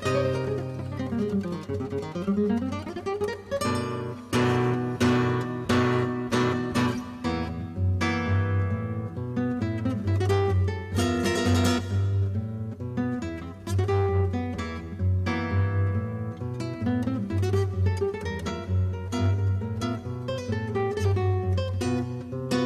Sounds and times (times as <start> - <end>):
Acoustic guitar: 0.0 - 22.6
Strum: 0.0 - 22.6.